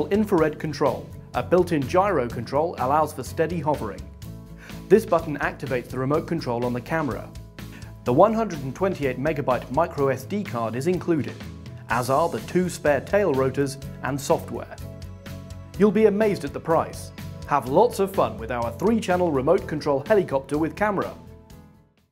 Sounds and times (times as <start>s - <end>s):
Speech: 0.0s - 4.1s, 4.9s - 7.3s, 8.1s - 14.8s, 15.8s - 21.2s
Music: 0.0s - 22.1s.